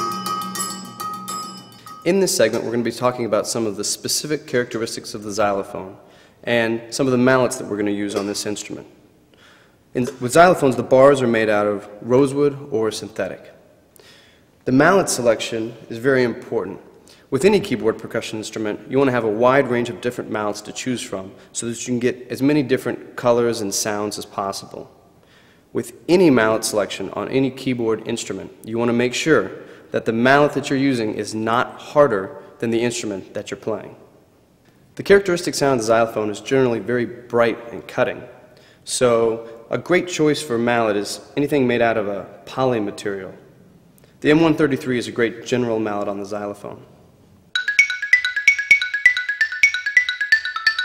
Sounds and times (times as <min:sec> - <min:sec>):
Speech: 0:02.1 - 0:09.0, 0:10.0 - 0:13.6, 0:14.6 - 0:24.9, 0:25.8 - 0:34.0, 0:35.0 - 0:38.3, 0:38.9 - 0:43.4, 0:44.2 - 0:46.9.